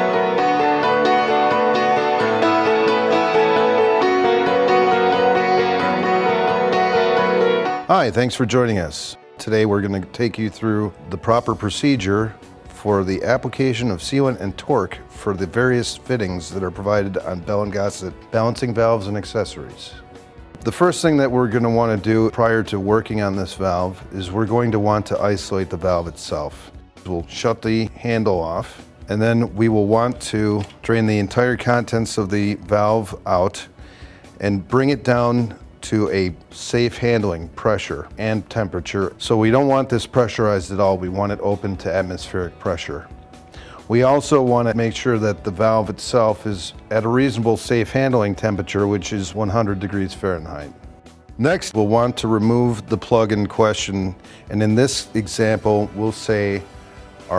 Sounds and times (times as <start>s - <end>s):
Speech: 7.9s - 20.0s, 20.6s - 33.7s, 34.4s - 43.1s, 43.9s - 50.8s, 51.4s - 56.6s.